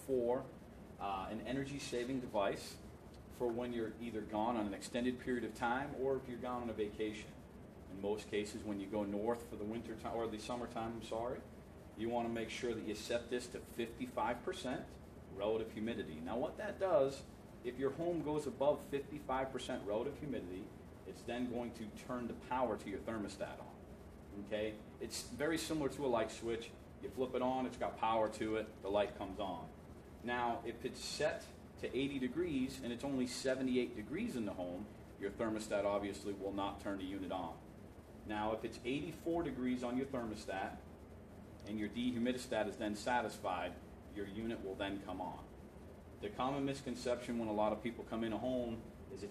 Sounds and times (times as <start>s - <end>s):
Speech: 0.0s - 2.8s, 3.4s - 37.7s, 38.3s - 40.9s, 41.7s - 45.5s, 46.2s - 49.3s.